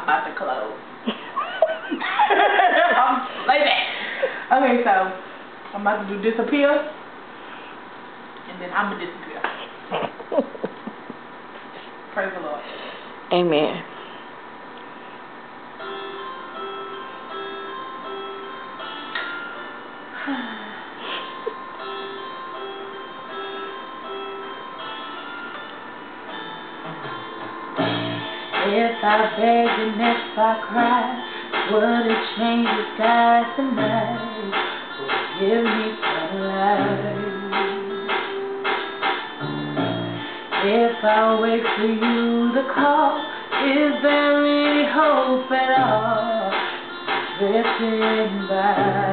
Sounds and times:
Music: 0:15.8 - 0:49.1.

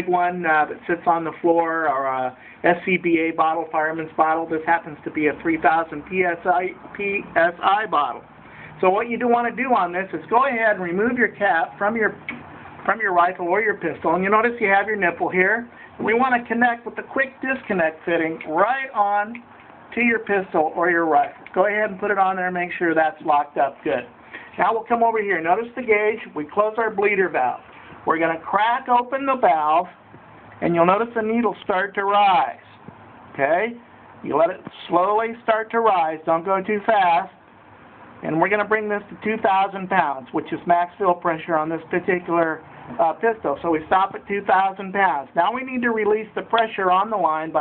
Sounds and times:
Speech: 0:00.0 - 0:30.0, 0:30.6 - 0:37.4, 0:38.2 - 0:47.6.

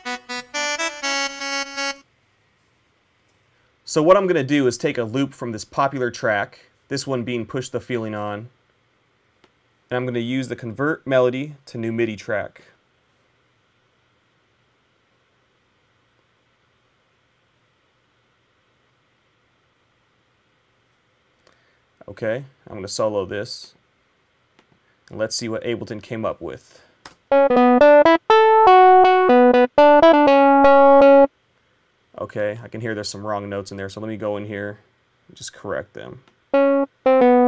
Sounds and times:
Speech: 0:03.9 - 0:08.6, 0:09.9 - 0:12.8, 0:22.0 - 0:23.8, 0:25.1 - 0:26.9, 0:32.1 - 0:36.3.

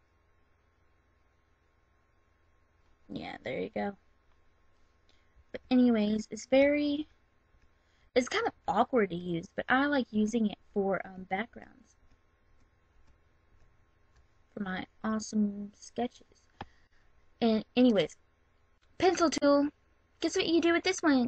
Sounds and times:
Speech: 0:03.1 - 0:04.0, 0:05.6 - 0:07.1, 0:08.2 - 0:11.8, 0:14.6 - 0:16.3, 0:17.4 - 0:18.2, 0:19.0 - 0:21.2.

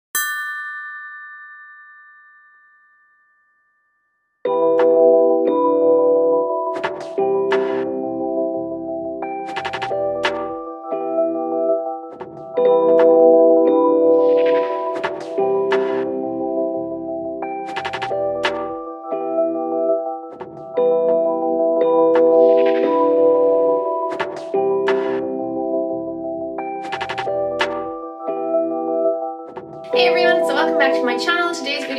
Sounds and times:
Ding: 0:00.2 - 0:04.8.

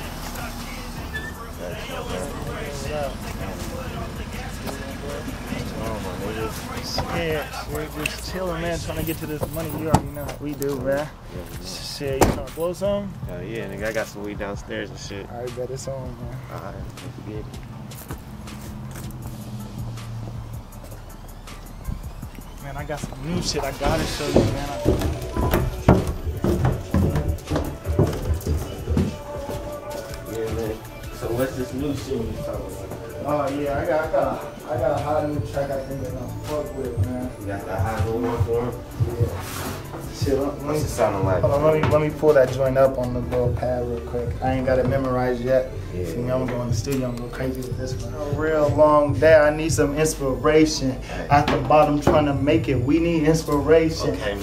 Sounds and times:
Music: 0:00.0 - 0:54.4.

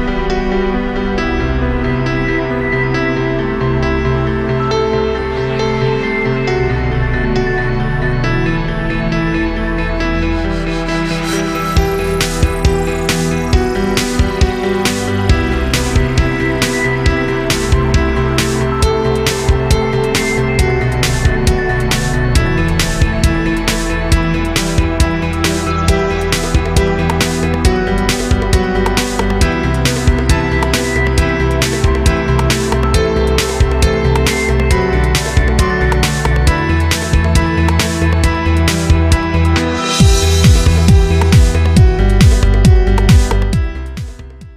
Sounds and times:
Music: 0:00.0 - 0:44.5.

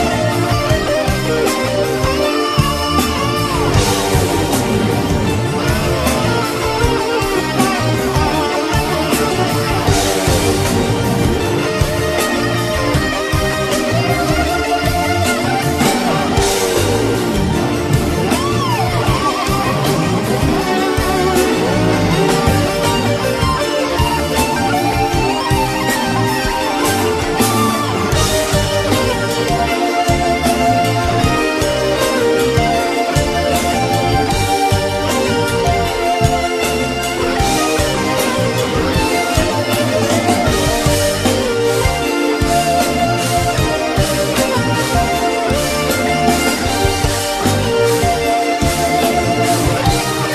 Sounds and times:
Bass guitar: 0:00.0 - 0:50.3.

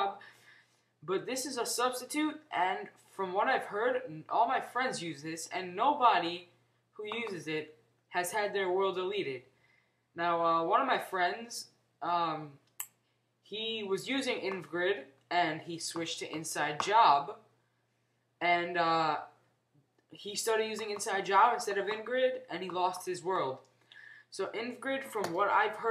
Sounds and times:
Speech: 0:00.0 - 0:00.2, 0:01.0 - 0:09.5, 0:10.2 - 0:12.6, 0:13.5 - 0:17.5, 0:18.4 - 0:19.4, 0:20.2 - 0:23.6, 0:24.3 - 0:25.9.

